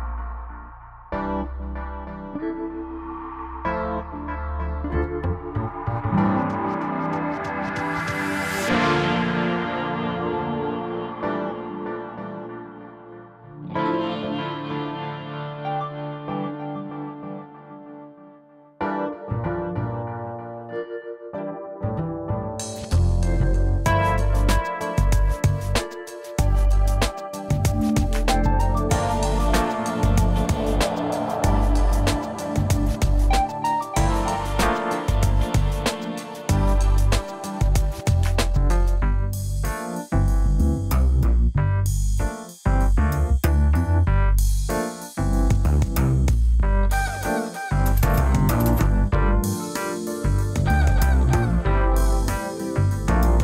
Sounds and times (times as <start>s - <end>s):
Music: 0.0s - 53.4s.